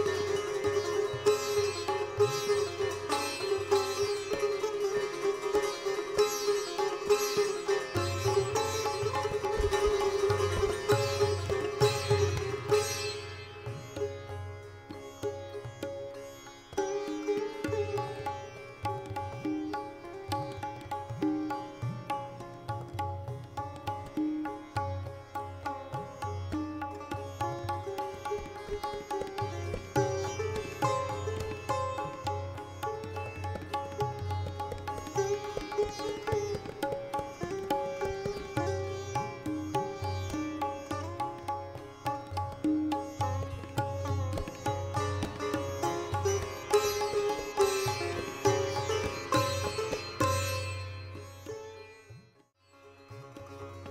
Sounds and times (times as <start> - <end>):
Bowed string instrument: 0.0 - 53.9
Sitar: 0.0 - 53.9.